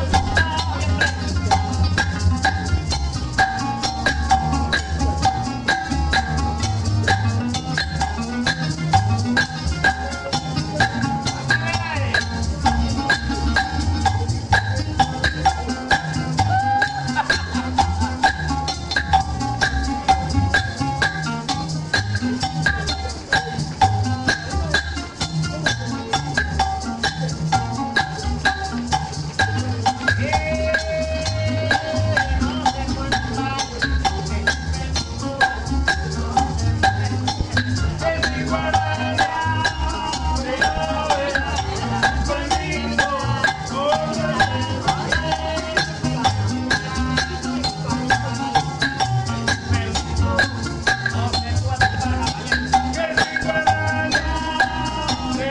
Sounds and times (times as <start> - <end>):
Music: 0.0 - 55.5
Speech: 9.7 - 17.6, 36.1 - 50.4.